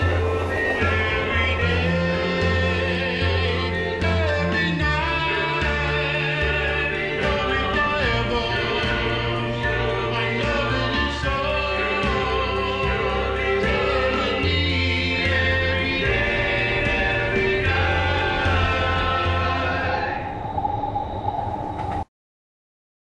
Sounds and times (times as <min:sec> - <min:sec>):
Music: 0:00.0 - 0:20.5
Subway, metro, underground: 0:00.0 - 0:22.1.